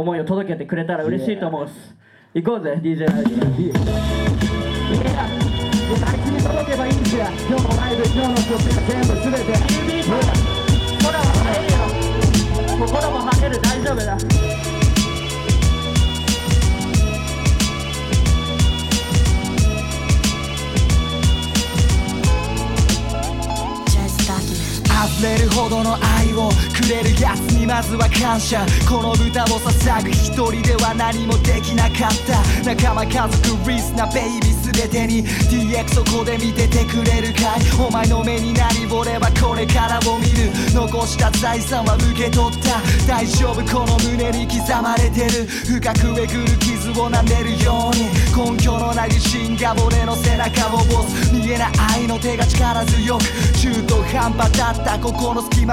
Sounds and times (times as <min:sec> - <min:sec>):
Music: 0:03.0 - 0:55.7.